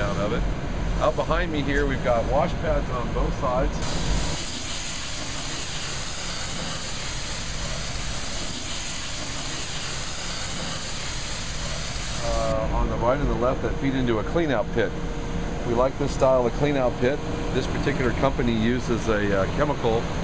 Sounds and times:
Speech: 0.0 - 0.4, 1.0 - 3.8, 12.2 - 15.0, 15.6 - 20.1.

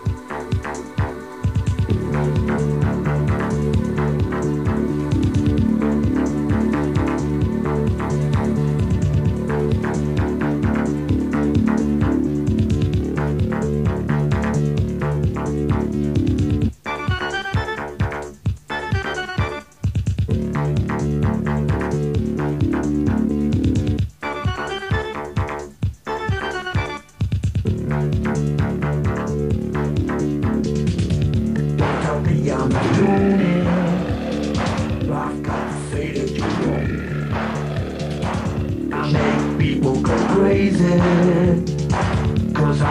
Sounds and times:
Music: 0.0 - 42.9.

